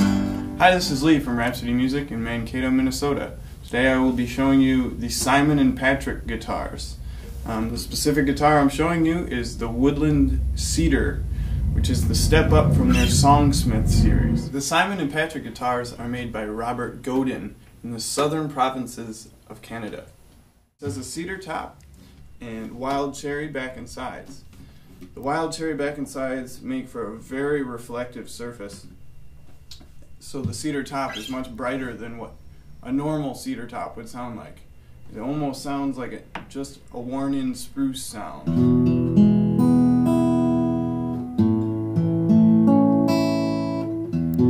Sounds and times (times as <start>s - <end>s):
Speech: 0.6s - 20.1s, 20.8s - 21.8s, 22.4s - 24.5s, 25.1s - 28.9s, 30.2s - 38.5s.